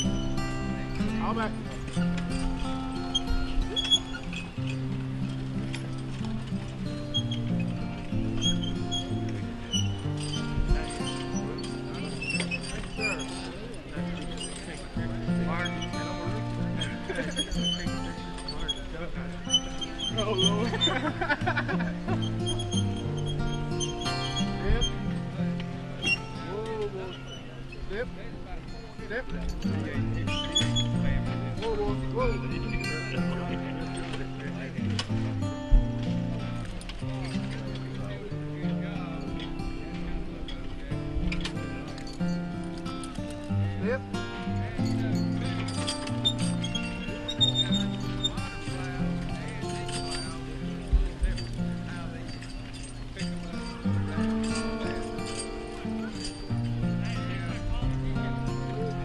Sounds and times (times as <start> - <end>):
Music: 0.0 - 59.0
Speech: 1.0 - 1.9, 10.6 - 21.8, 26.4 - 35.1, 37.0 - 42.0, 43.5 - 45.8, 47.0 - 52.4, 53.2 - 55.1, 57.0 - 59.0.